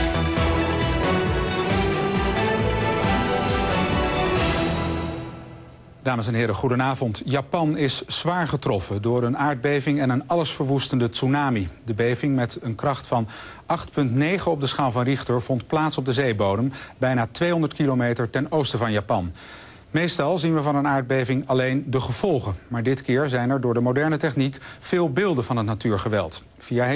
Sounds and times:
Music: 0.0s - 6.1s
Speech: 6.0s - 26.9s.

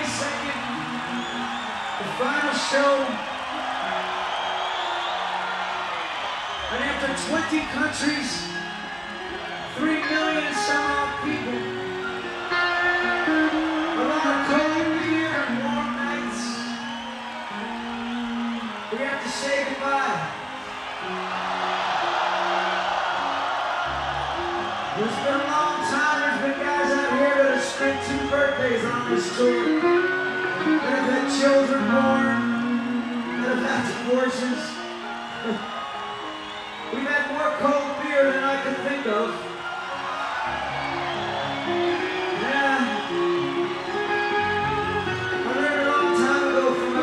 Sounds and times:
Male speech, man speaking: 0.0s - 0.6s, 2.0s - 3.2s, 6.7s - 8.5s, 9.7s - 11.6s, 14.0s - 16.8s, 18.9s - 20.3s, 25.0s - 29.7s, 30.8s - 32.5s, 33.4s - 34.8s, 36.9s - 39.4s, 42.4s - 43.0s, 45.5s - 47.0s
Music: 0.0s - 47.0s.

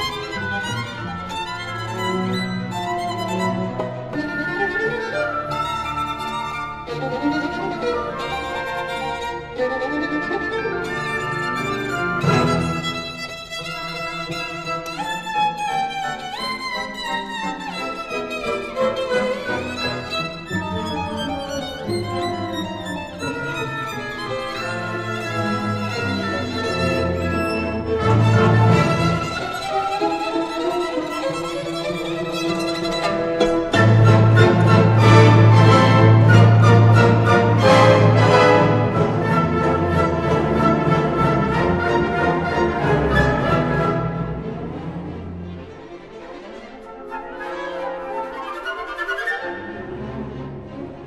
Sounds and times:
Violin, fiddle: 0.0s - 51.0s.

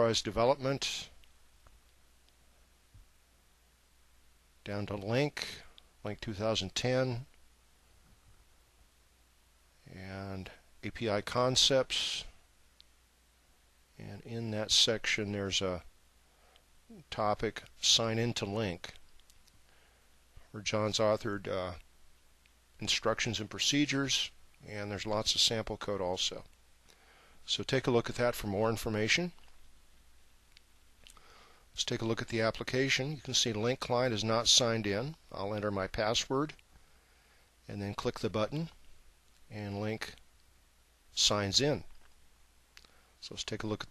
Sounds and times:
Speech: 0.0s - 1.2s, 4.6s - 7.3s, 9.8s - 12.4s, 14.0s - 15.9s, 16.9s - 19.0s, 20.4s - 21.9s, 22.8s - 26.5s, 27.5s - 29.4s, 31.8s - 36.6s, 37.7s - 38.8s, 39.5s - 40.2s, 41.2s - 41.9s, 43.2s - 43.9s.

